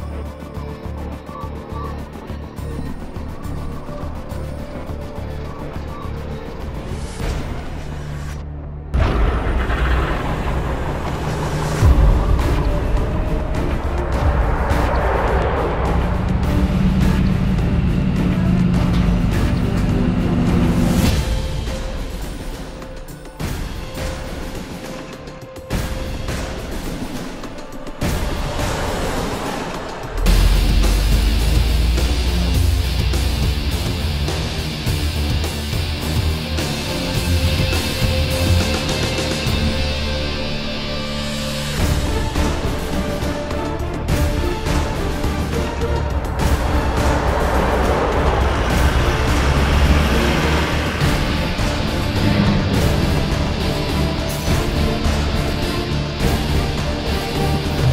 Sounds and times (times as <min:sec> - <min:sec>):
Music: 0:00.0 - 0:57.9.